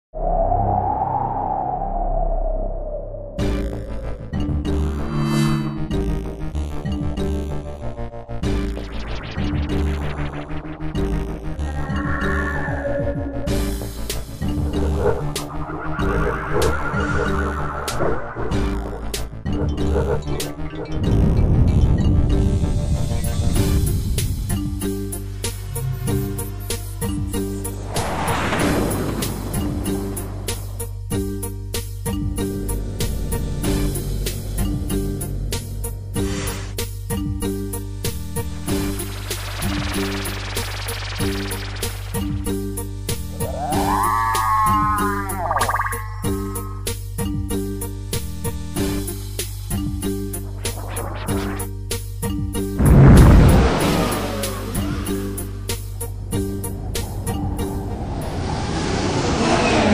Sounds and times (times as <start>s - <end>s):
Music: 3.4s - 58.8s.